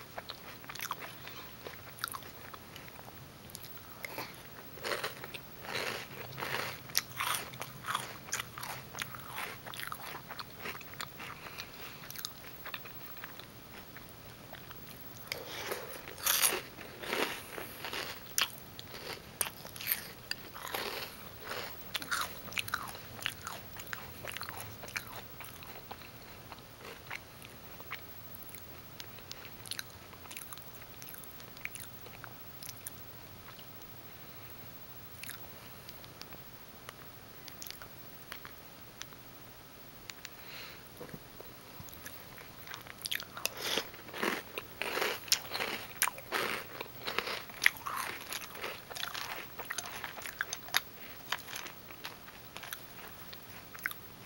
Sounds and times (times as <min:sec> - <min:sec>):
Chewing, mastication: 0:00.2 - 0:33.9, 0:35.2 - 0:39.2, 0:41.8 - 0:54.1.